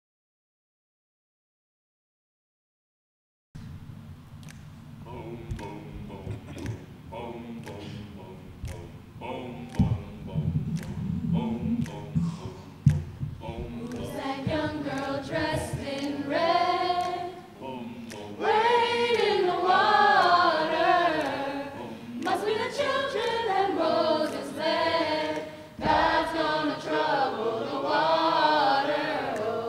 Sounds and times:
Choir: 0:05.0 - 0:29.6.

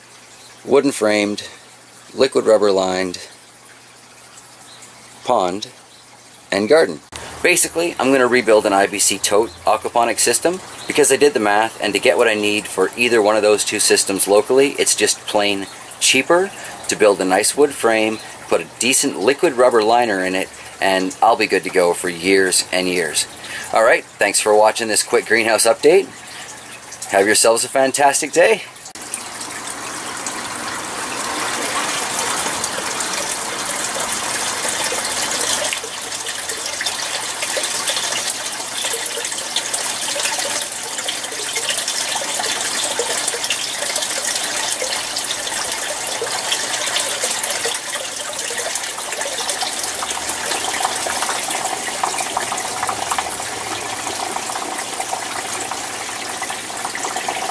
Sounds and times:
Bathtub (filling or washing): 0:00.0 - 0:57.5
Water tap, faucet: 0:00.0 - 0:57.5.

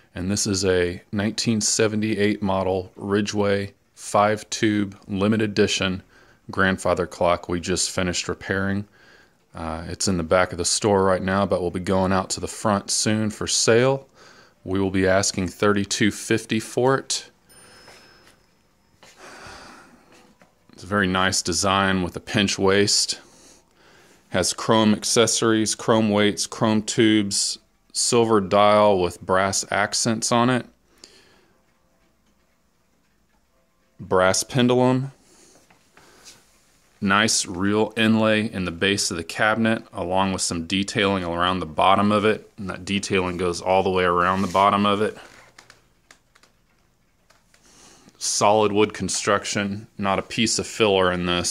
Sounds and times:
Speech: 0:00.1 - 0:08.9, 0:09.5 - 0:17.4, 0:20.7 - 0:23.3, 0:24.3 - 0:30.8, 0:34.0 - 0:35.2, 0:37.0 - 0:45.4, 0:48.2 - 0:51.5.

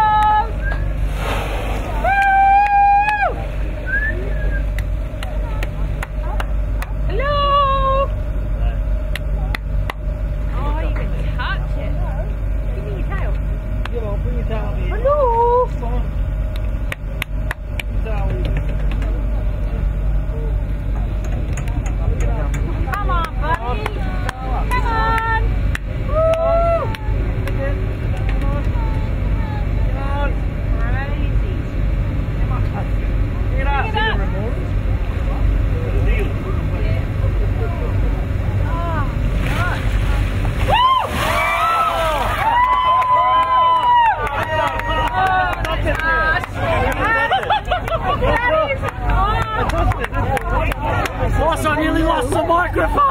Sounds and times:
Water: 0:00.0 - 0:53.1.

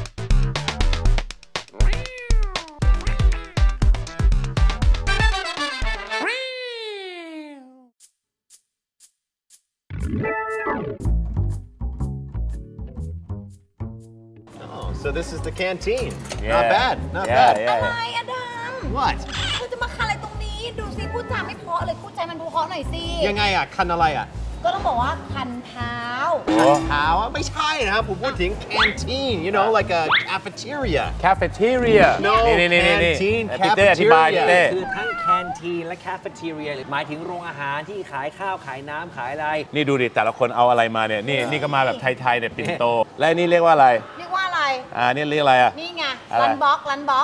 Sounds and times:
Music: 0:00.0 - 0:06.3, 0:09.9 - 0:34.7.

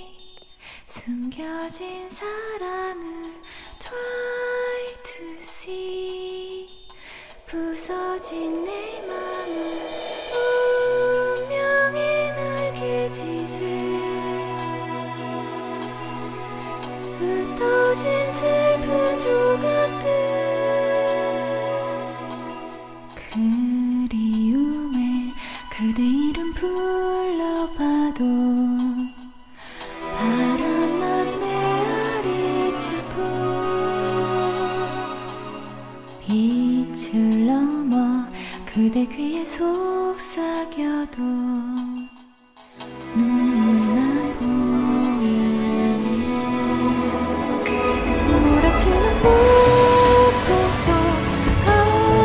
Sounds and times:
Female singing: 0:00.0 - 0:06.8, 0:07.5 - 0:16.1, 0:16.8 - 0:29.3, 0:29.9 - 0:35.6, 0:36.2 - 0:42.1, 0:43.0 - 0:52.2
Music: 0:00.0 - 0:52.2.

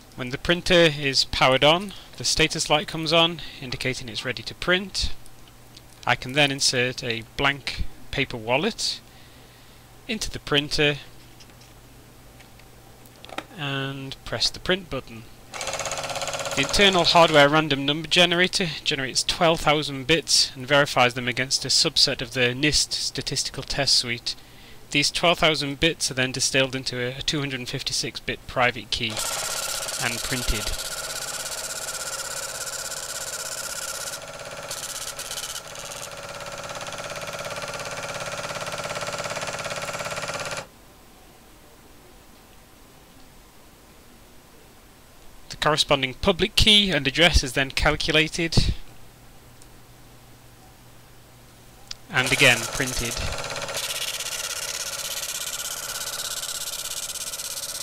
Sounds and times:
Speech: 0:00.2 - 0:05.2, 0:06.0 - 0:09.0, 0:10.1 - 0:11.1, 0:13.5 - 0:15.3, 0:16.6 - 0:29.2, 0:30.0 - 0:30.8, 0:45.5 - 0:48.9, 0:52.1 - 0:53.4
Printer: 0:15.6 - 0:17.5, 0:29.1 - 0:40.7, 0:52.2 - 0:57.8.

